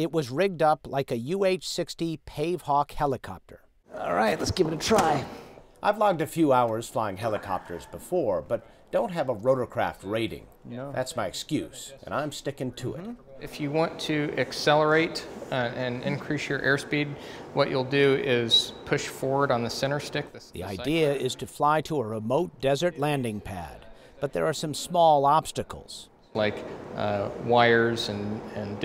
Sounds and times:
Speech: 0:00.0 - 0:28.8.

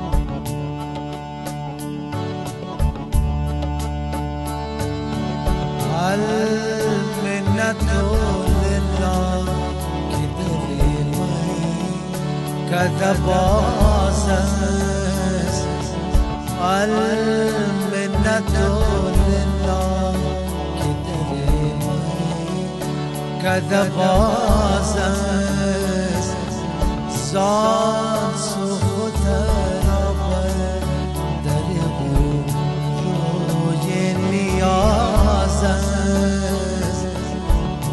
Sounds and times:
Traditional music: 0:00.0 - 0:37.9.

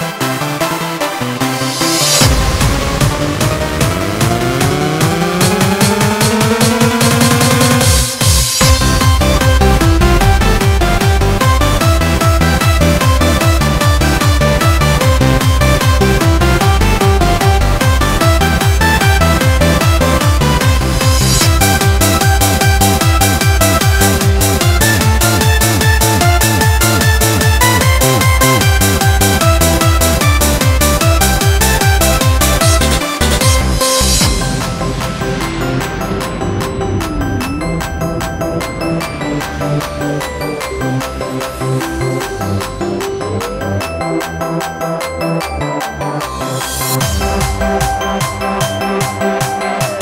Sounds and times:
Techno: 0:00.0 - 0:50.0.

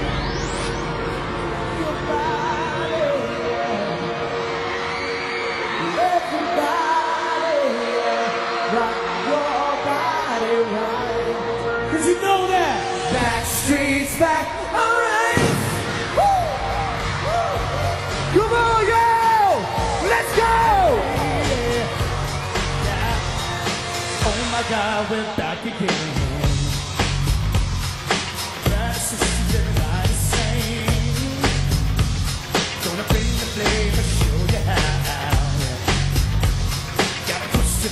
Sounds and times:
Music: 0:00.0 - 0:37.9.

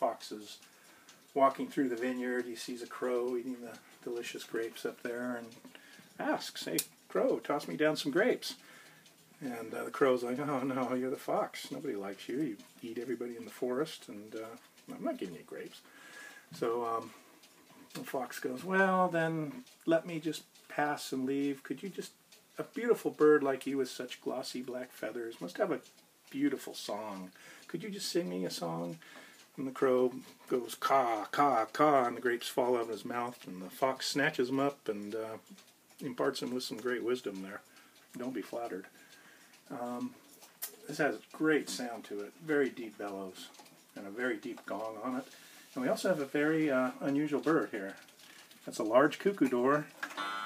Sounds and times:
Speech: 0:00.0 - 0:00.7, 0:01.4 - 0:05.6, 0:06.2 - 0:08.6, 0:09.4 - 0:15.9, 0:16.5 - 0:17.2, 0:18.0 - 0:29.0, 0:29.6 - 0:39.0, 0:39.7 - 0:48.0, 0:48.6 - 0:50.0
Tick: 0:09.0 - 0:09.3, 0:25.4 - 0:27.0, 0:35.1 - 0:43.8.

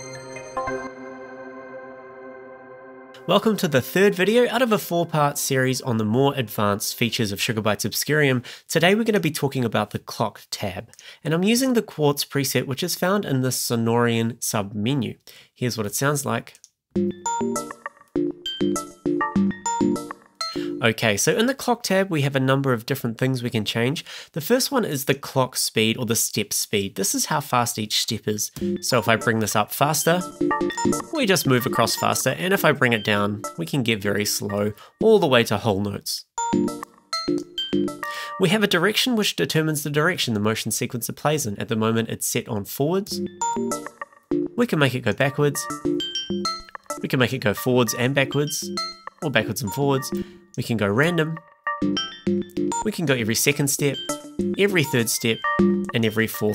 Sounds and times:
Music: 0:00.0 - 0:07.2, 0:17.0 - 0:21.0, 0:28.6 - 0:35.0, 0:36.4 - 0:38.5, 0:43.1 - 0:56.5
Speech: 0:03.2 - 0:16.7, 0:20.8 - 0:30.3, 0:31.0 - 0:36.3, 0:38.4 - 0:43.2, 0:44.6 - 0:45.7, 0:47.0 - 0:51.4, 0:52.8 - 0:54.0, 0:54.6 - 0:56.5.

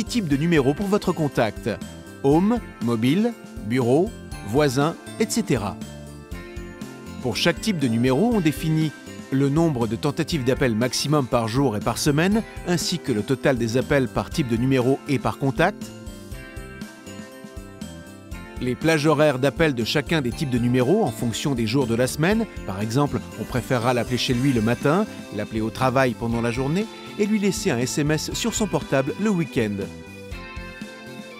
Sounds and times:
Speech: 0:00.0 - 0:05.8, 0:07.2 - 0:15.9, 0:18.6 - 0:29.9
Music: 0:00.0 - 0:31.3.

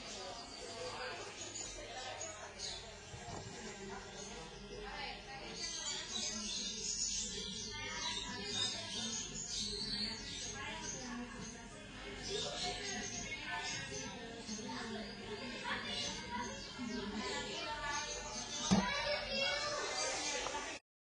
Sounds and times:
Speech: 0:00.0 - 0:20.8.

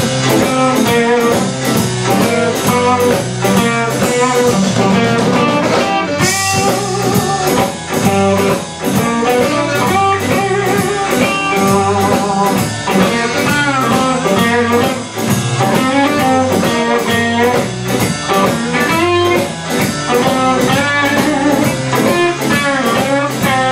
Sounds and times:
Music: 0:00.0 - 0:23.7.

